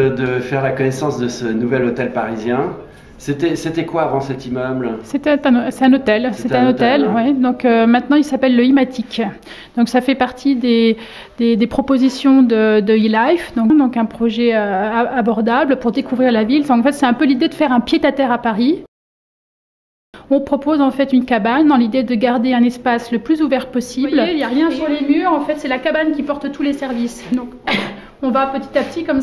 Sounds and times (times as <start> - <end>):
Speech: 20.4 - 27.6.